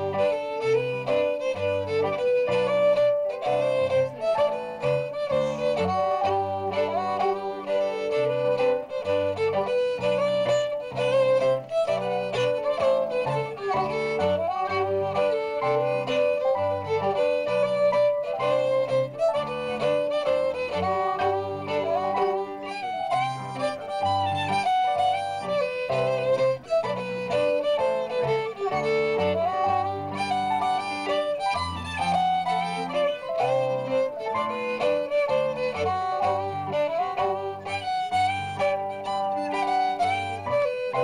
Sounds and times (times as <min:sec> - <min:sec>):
Bluegrass: 0:00.0 - 0:41.0
Classical music: 0:00.0 - 0:41.0
Musical instrument: 0:00.0 - 0:41.0.